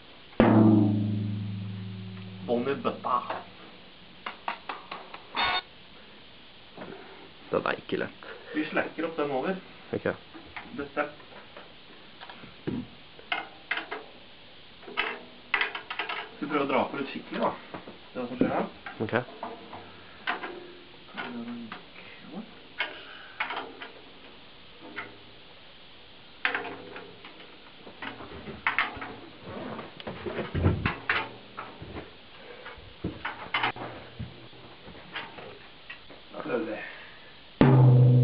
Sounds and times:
Music: 0.4 - 3.2, 37.6 - 38.2
Speech: 2.5 - 3.4, 7.5 - 11.2, 16.4 - 17.6, 18.2 - 19.3, 21.1 - 22.6, 36.3 - 37.0.

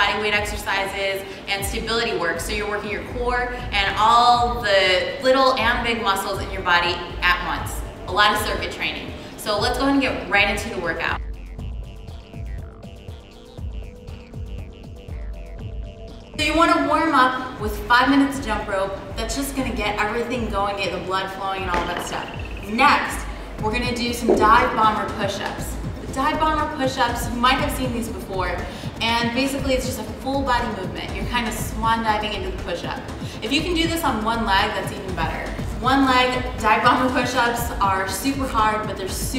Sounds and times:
Music: 0.0 - 39.3
Speech: 16.4 - 39.3.

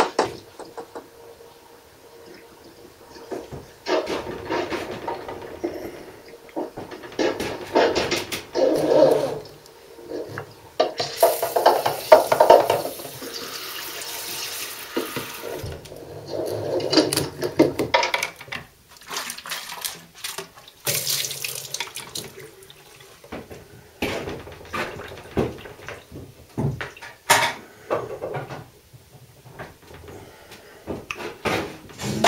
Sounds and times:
Sink (filling or washing): 10.8 - 15.8, 19.0 - 23.5
Water: 18.9 - 23.4.

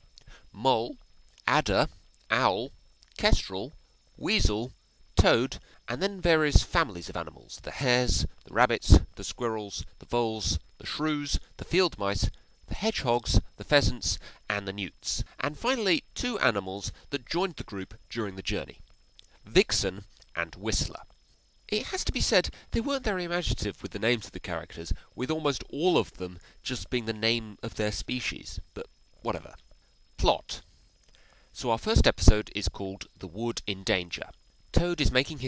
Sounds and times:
Speech: 0.5 - 18.8, 19.4 - 21.1, 21.7 - 29.6, 30.2 - 30.6, 31.6 - 35.4.

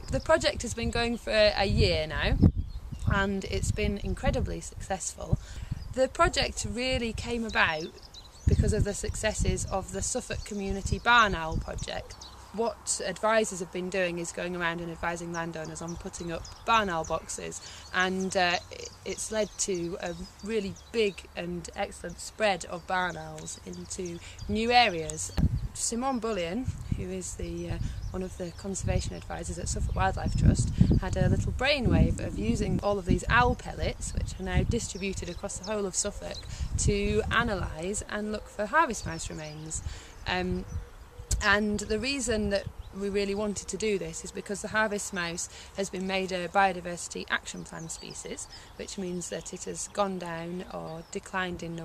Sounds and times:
Speech: 0.0 - 2.4, 3.0 - 7.9, 8.5 - 40.6, 41.3 - 51.8.

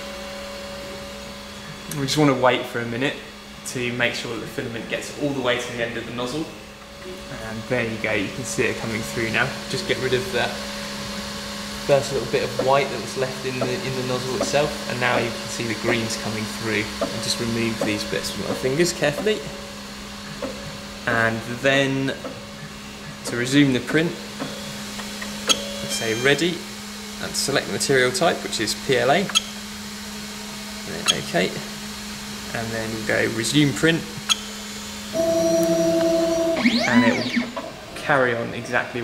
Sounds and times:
Speech: 1.9 - 6.6, 7.3 - 10.6, 11.9 - 19.5, 21.1 - 22.2, 23.2 - 24.2, 25.8 - 26.6, 27.2 - 29.4, 30.9 - 31.7, 32.5 - 34.2, 38.0 - 39.0.

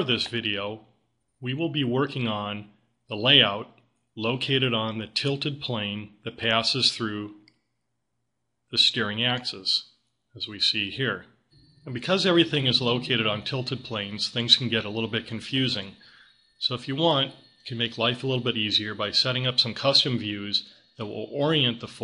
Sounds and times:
Speech: 0.0 - 7.4, 8.8 - 11.3, 11.9 - 22.0.

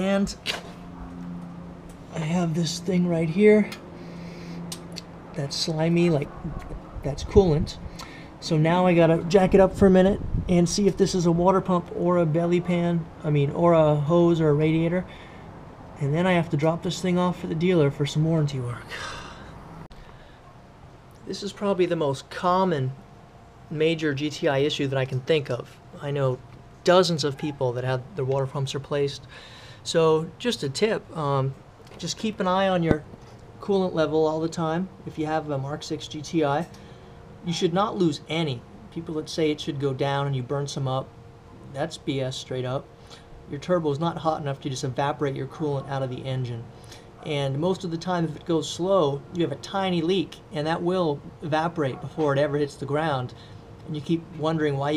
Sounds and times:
Speech: 0.0 - 0.4, 2.1 - 3.8, 5.4 - 7.8, 8.4 - 15.1, 16.0 - 18.9, 21.3 - 23.0, 23.7 - 29.3, 29.9 - 33.0, 33.6 - 36.7, 37.4 - 41.1, 41.7 - 42.9, 43.5 - 54.9.

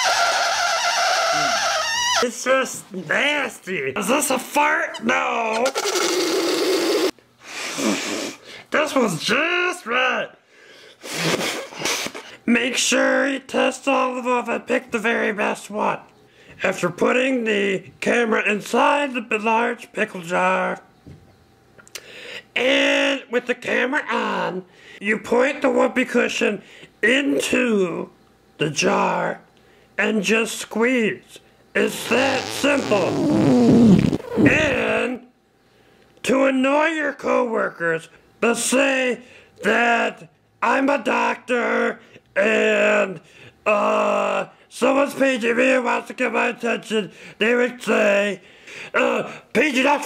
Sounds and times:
Fart: 0.0 - 2.2, 5.7 - 7.1, 32.0 - 34.9
Speech: 2.2 - 5.8, 8.7 - 10.4, 12.4 - 20.9, 22.6 - 33.2, 34.4 - 35.3, 36.2 - 50.0.

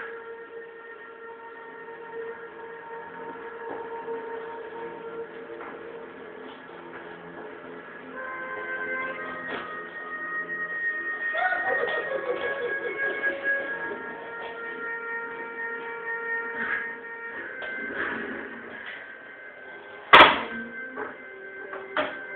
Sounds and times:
Music: 0.0 - 22.3.

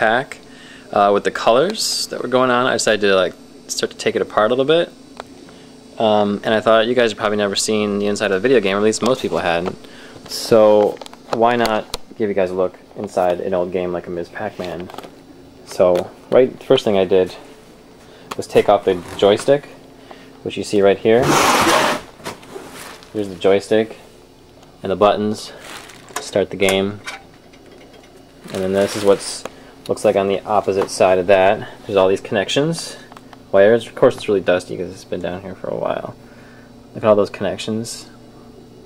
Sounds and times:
Speech: 0.0 - 5.0, 6.0 - 15.0, 15.6 - 17.5, 18.3 - 19.8, 20.4 - 21.4, 23.1 - 24.1, 24.8 - 25.6, 26.2 - 27.0, 28.4 - 36.2, 36.9 - 38.2.

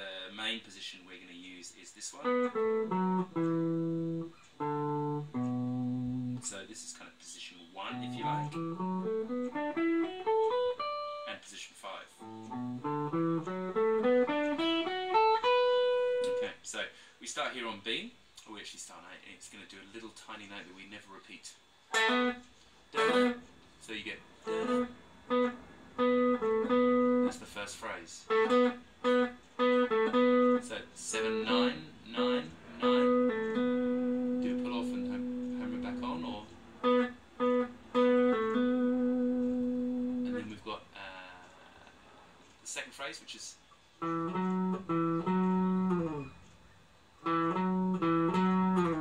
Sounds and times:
Speech: 0.0 - 2.4, 6.4 - 8.4, 11.3 - 12.2, 16.4 - 21.6, 23.8 - 24.2, 27.2 - 28.3, 30.6 - 33.1, 34.4 - 36.5, 40.2 - 41.5, 42.6 - 43.6
Tapping (guitar technique): 2.2 - 7.0, 7.8 - 11.5, 12.2 - 16.6, 21.9 - 23.6, 24.4 - 40.6, 44.0 - 46.6, 47.2 - 49.0.

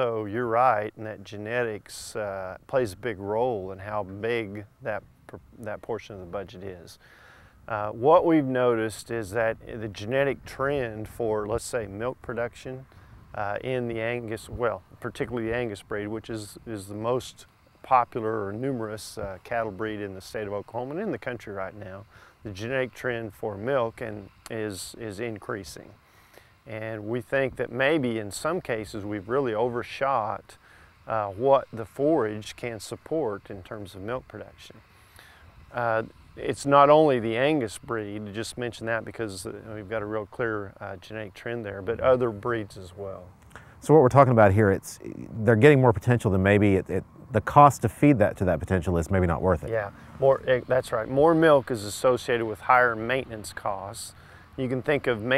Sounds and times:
Speech: 0.0 - 7.0, 7.7 - 26.0, 26.7 - 34.8, 35.8 - 55.3.

